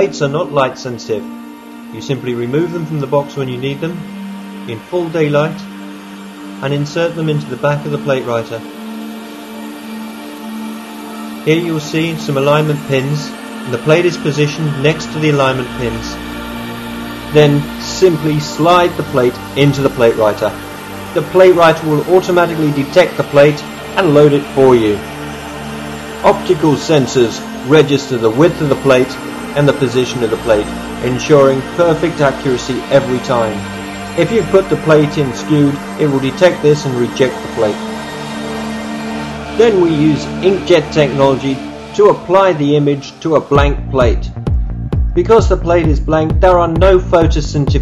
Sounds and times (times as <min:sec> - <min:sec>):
Speech: 0:00.0 - 0:01.3, 0:02.0 - 0:04.0, 0:04.7 - 0:05.6, 0:06.6 - 0:08.6, 0:11.5 - 0:16.2, 0:17.3 - 0:20.6, 0:21.2 - 0:25.0, 0:26.2 - 0:33.6, 0:34.2 - 0:37.8, 0:39.6 - 0:44.3, 0:45.2 - 0:47.8
Music: 0:00.0 - 0:47.8.